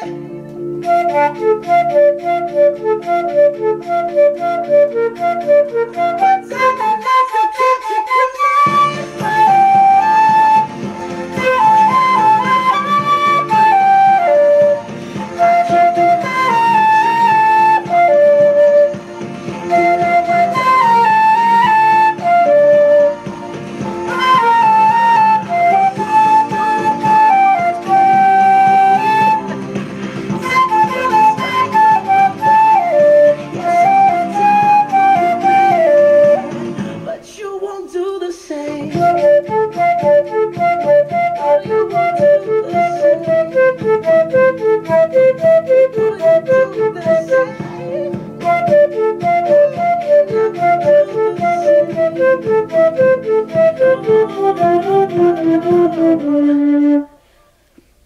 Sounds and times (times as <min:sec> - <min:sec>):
Flute: 0:00.0 - 0:37.2, 0:38.8 - 0:57.8.